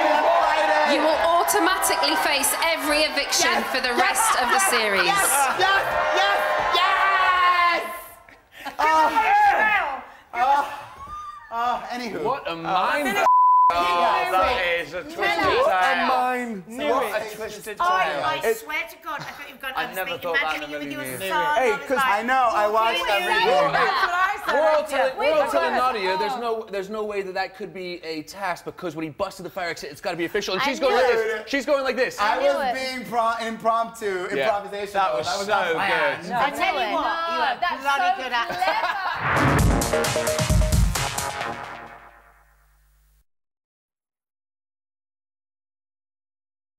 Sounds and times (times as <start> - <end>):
Music: 39.2 - 42.5.